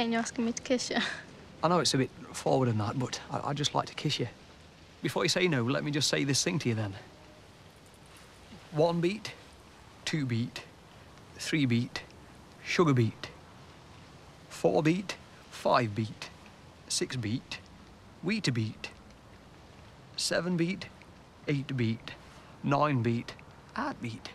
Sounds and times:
Speech: 0:00.0 - 0:04.4, 0:05.0 - 0:07.0, 0:08.6 - 0:09.4, 0:10.1 - 0:10.7, 0:11.4 - 0:13.4, 0:14.6 - 0:17.6, 0:18.2 - 0:19.0, 0:20.2 - 0:20.9, 0:21.5 - 0:24.3.

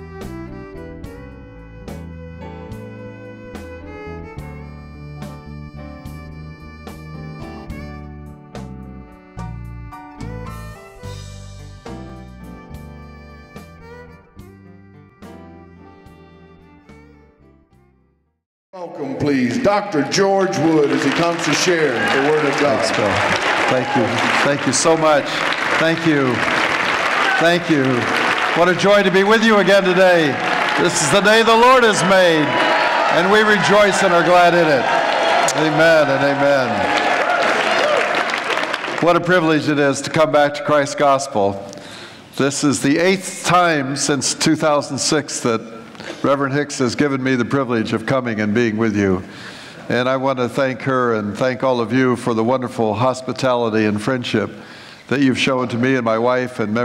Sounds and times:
Music: 0:00.0 - 0:54.5
Speech: 0:18.8 - 0:23.2, 0:23.8 - 0:26.4, 0:27.6 - 0:32.5, 0:33.1 - 0:34.8, 0:35.5 - 0:36.8, 0:39.0 - 0:41.6, 0:42.4 - 0:49.2, 0:49.9 - 0:56.8.

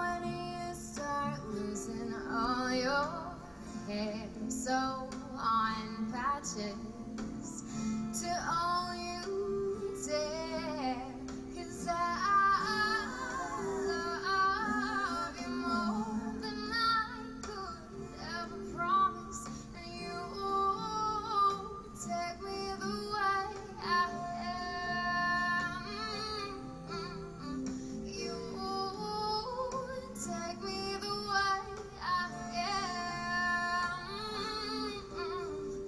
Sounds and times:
Female singing: 0:00.0 - 0:35.8
Music: 0:00.0 - 0:35.8.

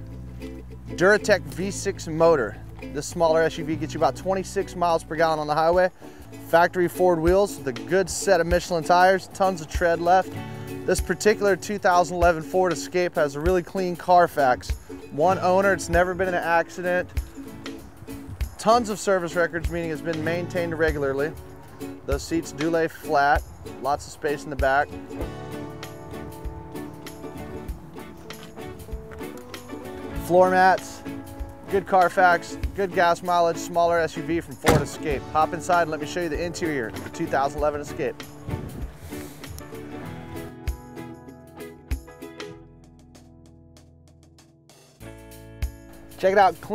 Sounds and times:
Music: 0:00.0 - 0:46.7
Speech: 0:01.0 - 0:05.9, 0:06.5 - 0:10.3, 0:10.9 - 0:17.1, 0:18.6 - 0:21.4, 0:22.1 - 0:24.9, 0:30.2 - 0:31.0, 0:31.7 - 0:38.2, 0:46.2 - 0:46.7.

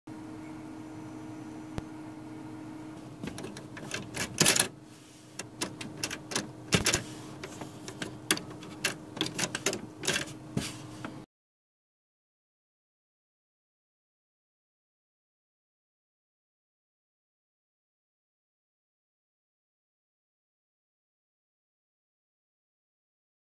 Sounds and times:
Printer: 0:00.4 - 0:11.2.

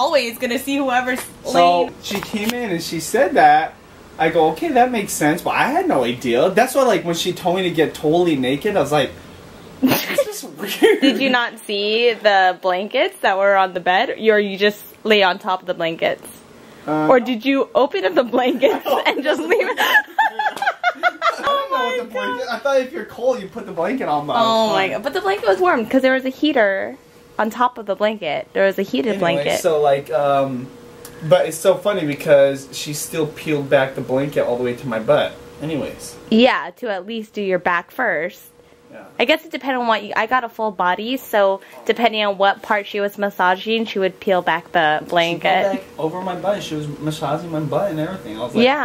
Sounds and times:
Speech: 0:00.0 - 0:09.1, 0:10.2 - 0:16.3, 0:16.9 - 0:19.8, 0:21.2 - 0:48.8
Chuckle, chortle: 0:09.8 - 0:11.3, 0:18.6 - 0:21.5.

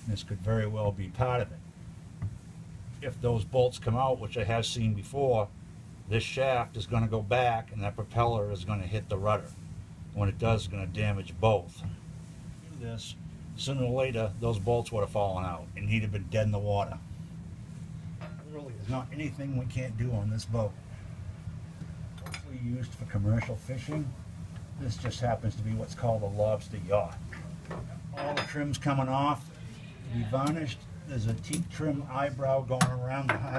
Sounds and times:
Speech: 0:00.0 - 0:01.6, 0:03.0 - 0:05.5, 0:06.1 - 0:09.5, 0:10.2 - 0:12.0, 0:12.6 - 0:17.0, 0:18.4 - 0:20.8, 0:22.4 - 0:24.2, 0:24.8 - 0:27.2, 0:28.2 - 0:29.5, 0:30.1 - 0:33.5.

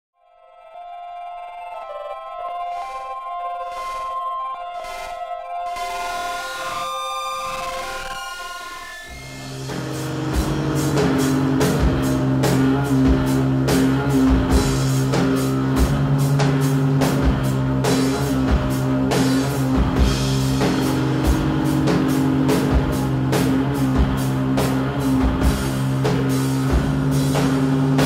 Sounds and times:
Music: 0:00.2 - 0:28.0.

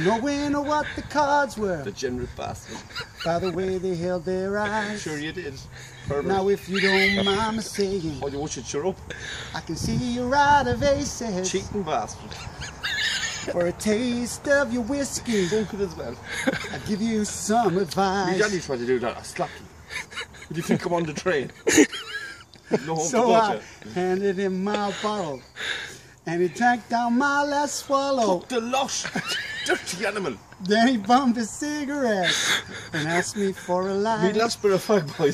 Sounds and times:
Outside, rural or natural: 0:00.0 - 0:35.3
Speech: 0:22.8 - 0:25.4, 0:33.0 - 0:35.3.

